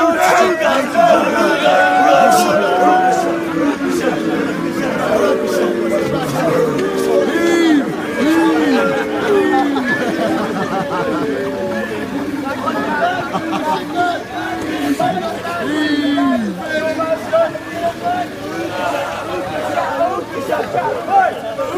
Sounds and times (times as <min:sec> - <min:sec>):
Speech: 0:00.0 - 0:21.7.